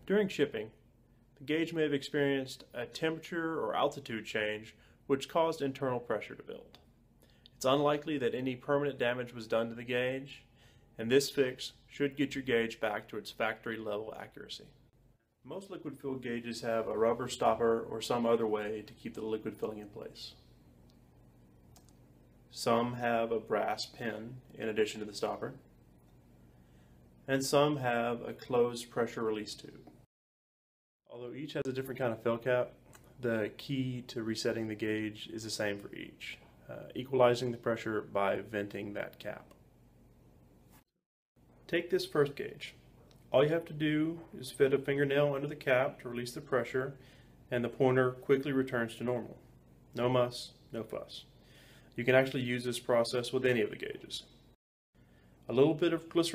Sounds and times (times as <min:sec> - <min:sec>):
Speech: 0:00.0 - 0:00.8, 0:01.4 - 0:06.8, 0:07.6 - 0:14.8, 0:15.4 - 0:20.5, 0:22.5 - 0:25.7, 0:27.3 - 0:30.0, 0:31.1 - 0:39.6, 0:41.7 - 0:49.4, 0:50.0 - 0:51.3, 0:52.0 - 0:54.4, 0:55.5 - 0:56.3.